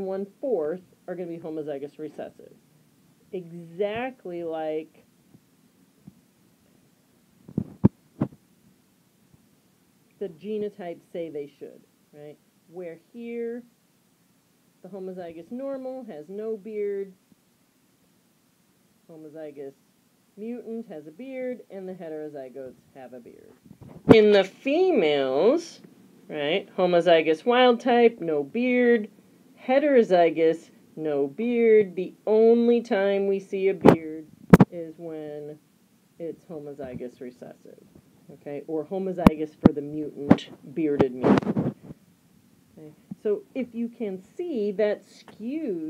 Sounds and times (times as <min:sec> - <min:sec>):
Speech: 0:00.0 - 0:02.6, 0:03.3 - 0:05.1, 0:10.2 - 0:13.7, 0:14.8 - 0:17.2, 0:19.1 - 0:19.8, 0:20.4 - 0:35.6, 0:36.2 - 0:41.5, 0:42.8 - 0:45.8.